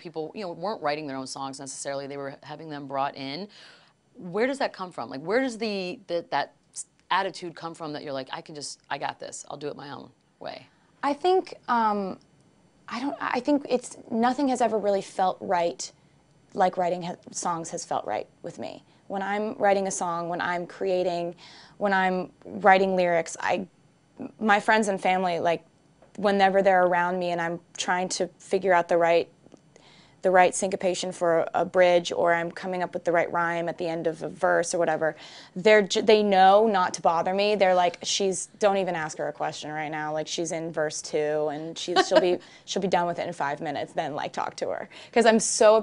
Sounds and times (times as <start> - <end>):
Speech: 0.0 - 3.5, 4.2 - 12.2, 12.9 - 15.9, 16.6 - 25.6, 30.3 - 45.8.